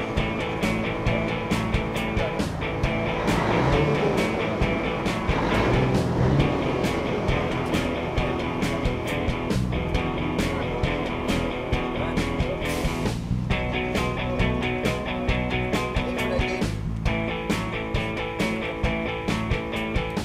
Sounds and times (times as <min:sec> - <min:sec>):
Music: 0:00.0 - 0:20.2.